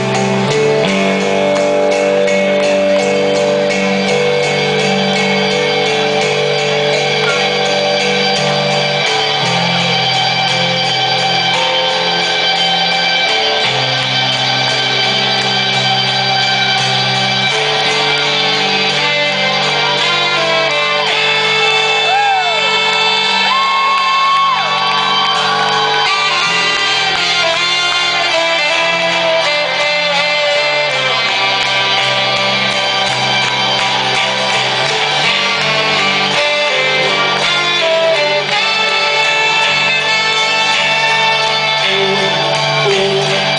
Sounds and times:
Music: 0.0s - 43.5s.

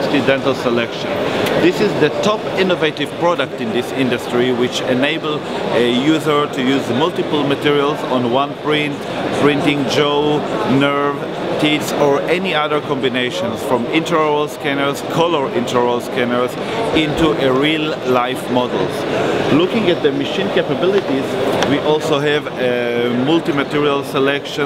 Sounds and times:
Speech: 0.0s - 24.6s.

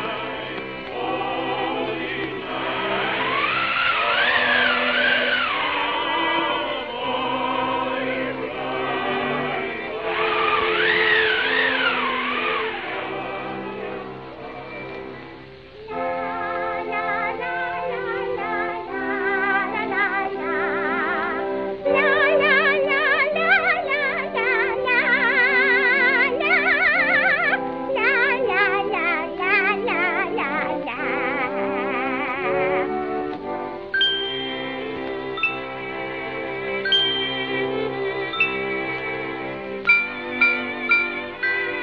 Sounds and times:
Music: 0.0s - 41.8s.

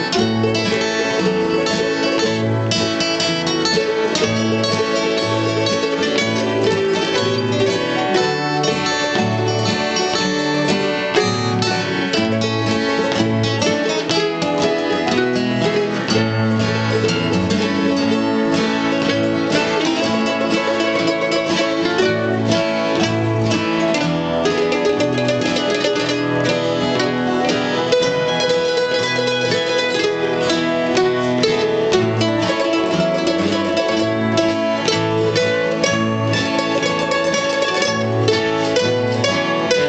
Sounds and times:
Music: 0.0s - 39.8s.

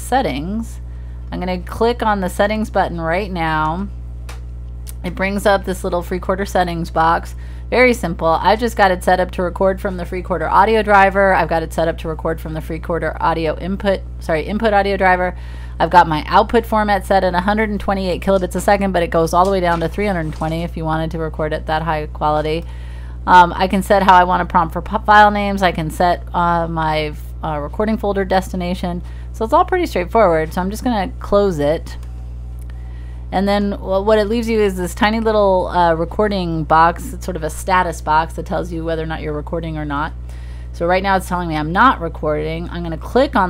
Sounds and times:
Speech: 0.0s - 3.9s, 4.9s - 22.6s, 23.3s - 32.0s, 33.3s - 40.2s, 40.8s - 43.5s.

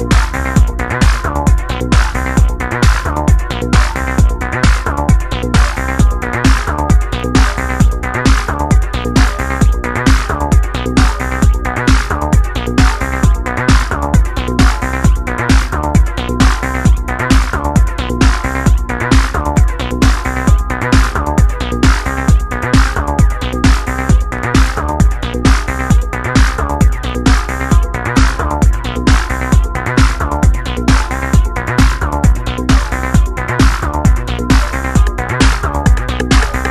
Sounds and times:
Sampler: 0.0s - 36.7s.

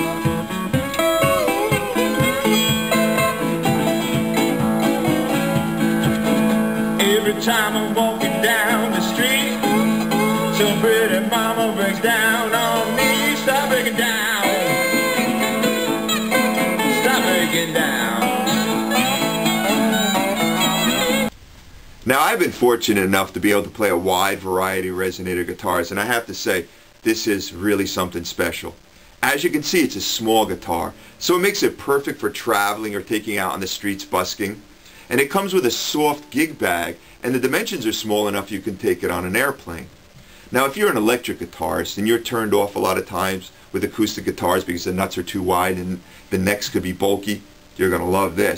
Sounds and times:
Banjo: 0.0s - 21.3s
Acoustic guitar: 0.0s - 21.4s, 28.9s - 48.5s
Strum: 0.0s - 21.4s.

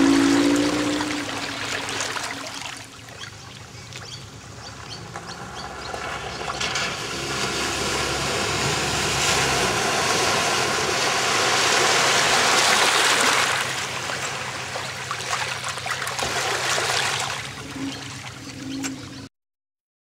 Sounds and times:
Car: 0.0s - 19.3s.

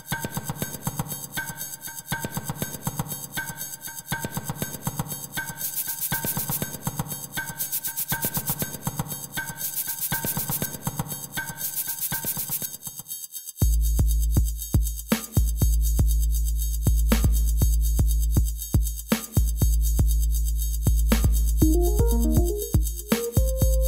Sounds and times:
Music: 0.0s - 23.8s.

